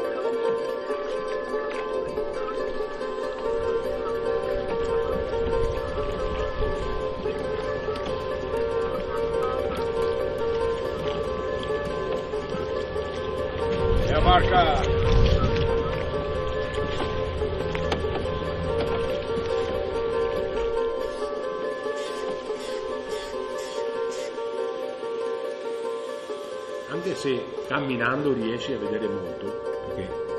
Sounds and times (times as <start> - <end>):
Music: 0.0 - 30.3
Outside, urban or manmade: 0.0 - 30.3.